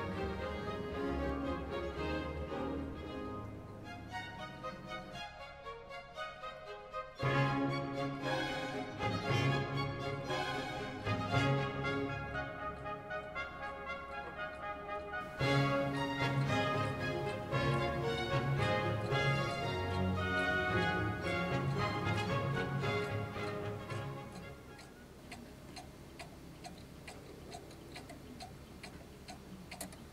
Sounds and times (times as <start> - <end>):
Music: 0.0 - 25.0.